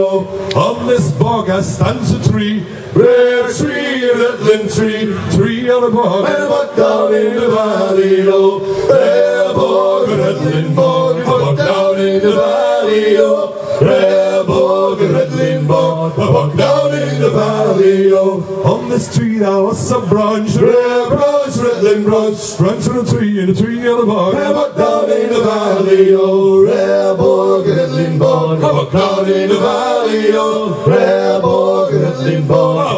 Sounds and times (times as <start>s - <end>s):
Chant: 0.0s - 32.9s.